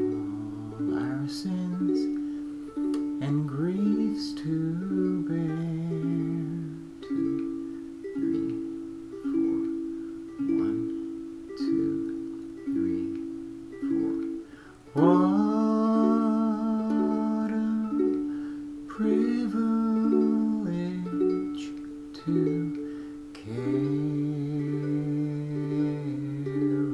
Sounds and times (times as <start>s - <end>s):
Inside, small room: 0.0s - 26.9s
Ukulele: 0.0s - 26.9s
Singing: 3.2s - 7.3s, 14.9s - 18.3s, 18.9s - 22.8s, 23.4s - 26.9s.